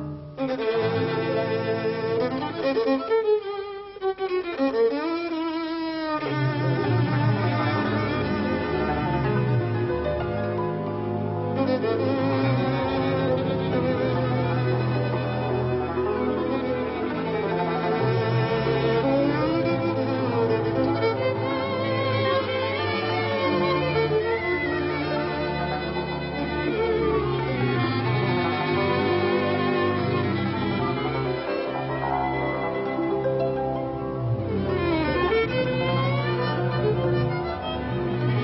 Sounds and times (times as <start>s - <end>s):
Violin, fiddle: 0.0s - 38.4s.